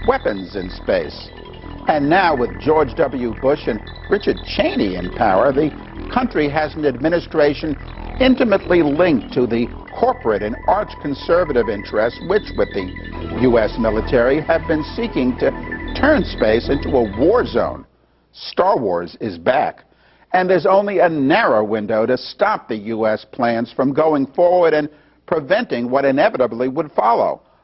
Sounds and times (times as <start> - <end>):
Male speech, man speaking: 0.0 - 1.3, 1.9 - 17.8, 18.4 - 27.4
Music: 0.0 - 17.9
Narration, monologue: 0.0 - 27.6.